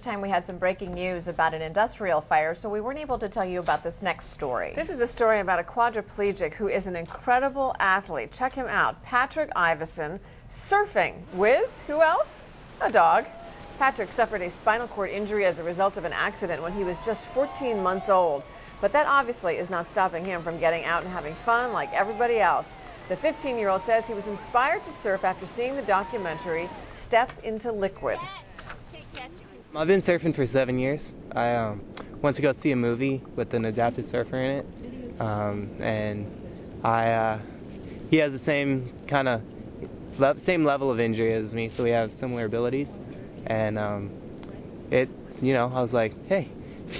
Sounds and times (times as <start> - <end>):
Ocean: 5.0 - 46.9.